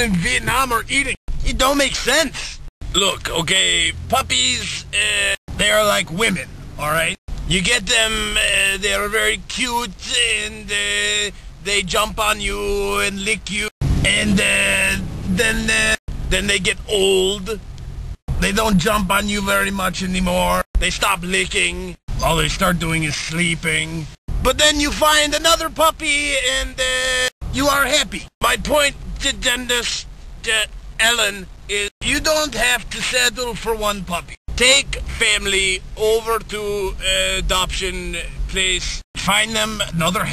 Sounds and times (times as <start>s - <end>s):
Speech: 0.0s - 17.6s, 18.3s - 40.3s.